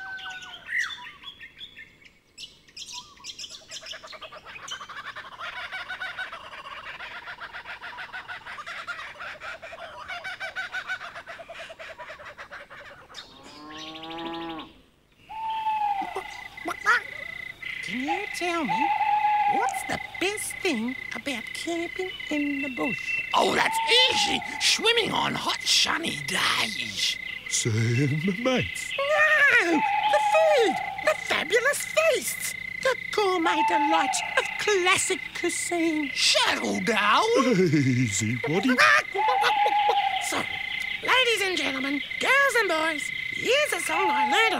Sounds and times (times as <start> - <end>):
Speech: 19.6 - 39.5, 40.2 - 44.5.